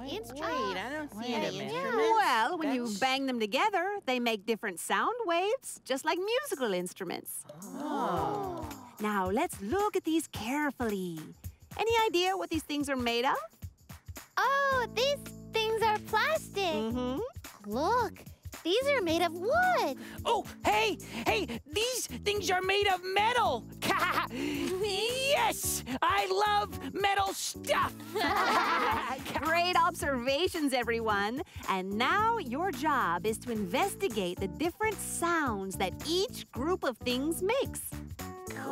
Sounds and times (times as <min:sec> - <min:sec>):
Speech: 0:20.3 - 0:27.9, 0:28.8 - 0:37.9.